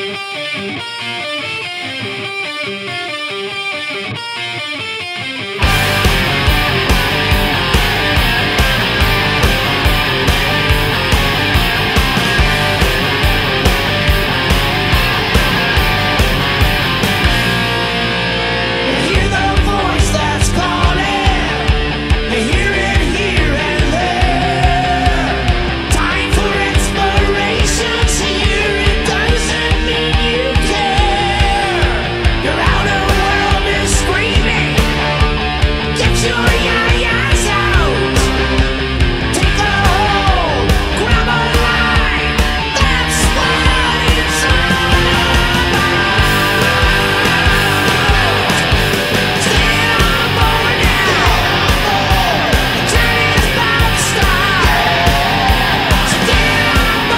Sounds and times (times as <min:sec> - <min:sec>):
Music: 0:00.0 - 0:57.1.